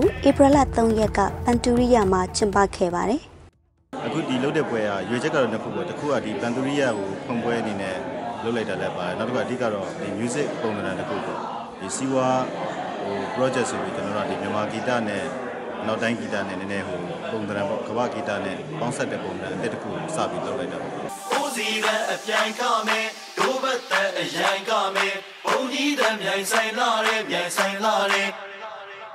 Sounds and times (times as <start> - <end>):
Speech: 0.0 - 3.3, 4.0 - 21.1.